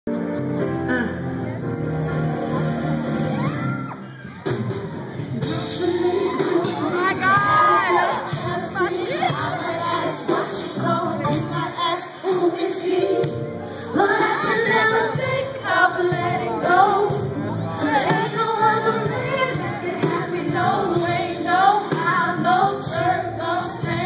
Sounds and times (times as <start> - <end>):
Music: 0.0 - 24.0
Inside, large room or hall: 0.1 - 24.0
Singing: 5.2 - 24.0.